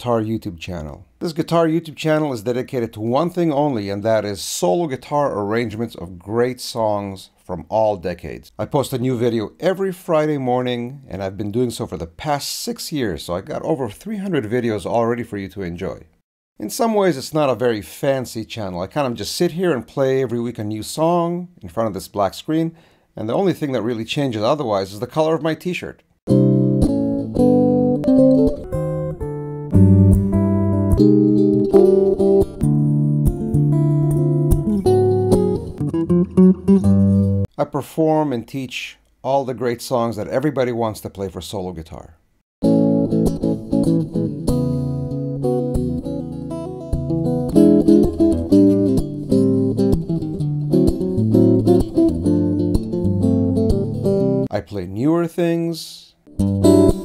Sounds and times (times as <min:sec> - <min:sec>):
Speech: 0:00.0 - 0:26.0, 0:37.5 - 0:42.2, 0:54.5 - 0:56.2
Strum: 0:26.3 - 0:37.4, 0:42.6 - 0:54.5, 0:56.3 - 0:57.0
Acoustic guitar: 0:26.3 - 0:37.5, 0:42.6 - 0:54.5, 0:56.3 - 0:57.0.